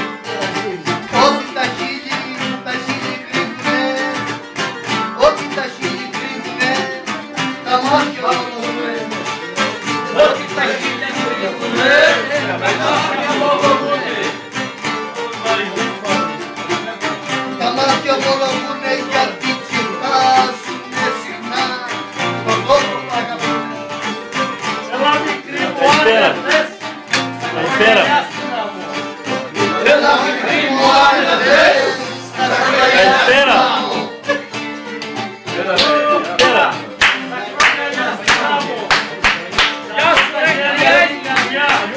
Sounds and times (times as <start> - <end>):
Music: 0.0 - 41.9.